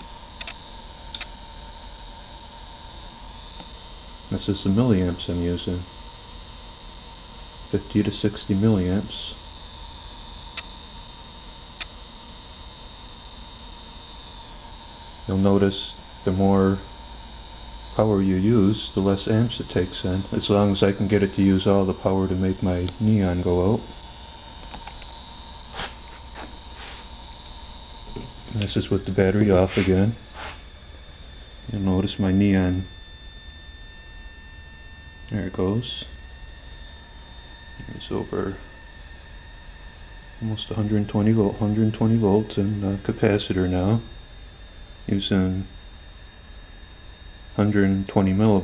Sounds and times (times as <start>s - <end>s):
Electric shaver, electric razor: 0.0s - 48.6s
Speech: 4.3s - 5.9s, 7.7s - 9.4s, 15.3s - 16.9s, 18.0s - 23.9s, 28.6s - 30.2s, 31.7s - 32.9s, 35.3s - 36.1s, 37.8s - 38.6s, 40.4s - 44.1s, 45.1s - 45.7s, 47.6s - 48.6s.